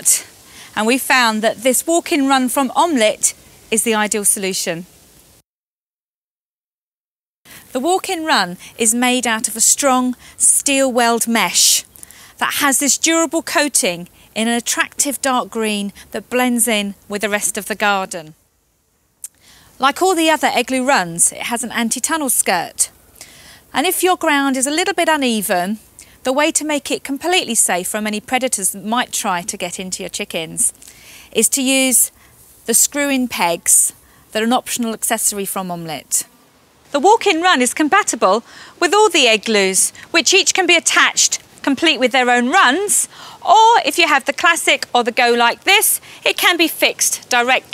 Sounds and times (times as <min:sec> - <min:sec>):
Speech: 0:00.0 - 0:04.9, 0:07.7 - 0:18.4, 0:19.8 - 0:22.9, 0:23.7 - 0:30.8, 0:31.4 - 0:32.1, 0:32.7 - 0:36.3, 0:36.9 - 0:47.7.